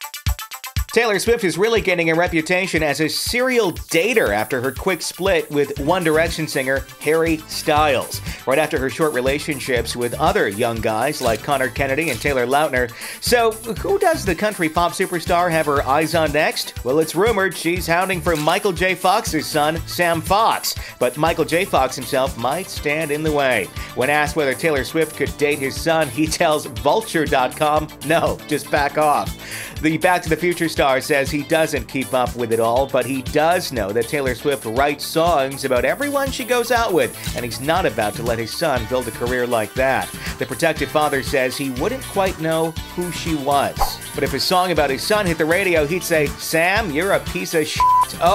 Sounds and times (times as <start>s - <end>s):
Music: 0.0s - 48.3s
Speech: 0.9s - 48.3s.